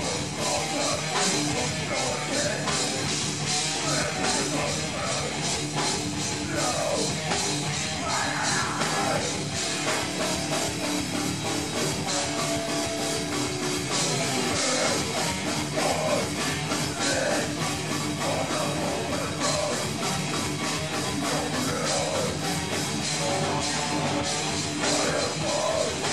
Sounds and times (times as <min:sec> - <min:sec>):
Rock music: 0:00.0 - 0:26.1.